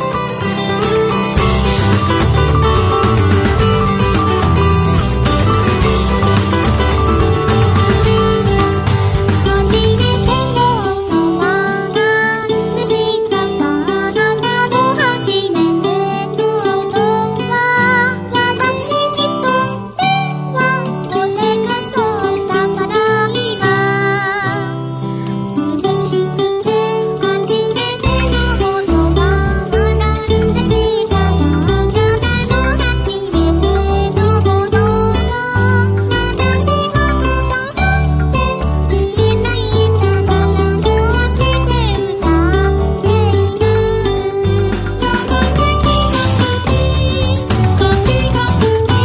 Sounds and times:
Music: 0:00.0 - 0:49.0.

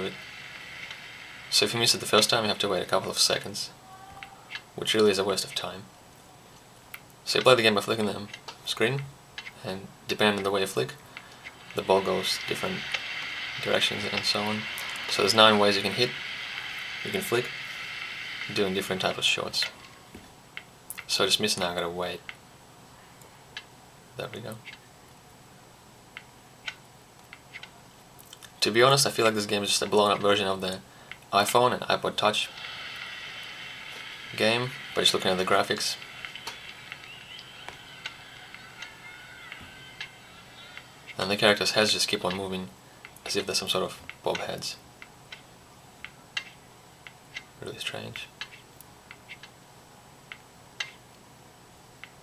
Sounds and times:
Speech: 0:00.0 - 0:00.2, 0:01.5 - 0:05.9, 0:07.3 - 0:11.0, 0:11.8 - 0:12.9, 0:13.6 - 0:16.2, 0:17.0 - 0:17.6, 0:18.5 - 0:19.8, 0:21.0 - 0:22.3, 0:24.2 - 0:24.7, 0:28.6 - 0:32.5, 0:34.3 - 0:44.8, 0:47.6 - 0:48.4.

